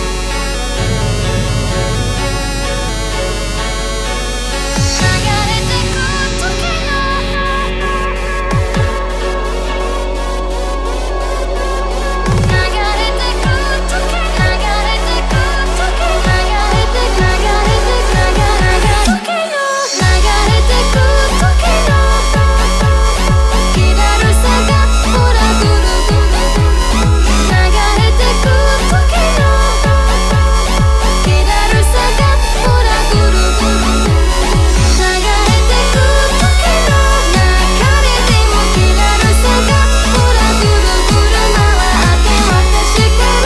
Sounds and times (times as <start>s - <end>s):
Dubstep: 0.0s - 43.4s
Electronic dance music: 0.0s - 43.4s.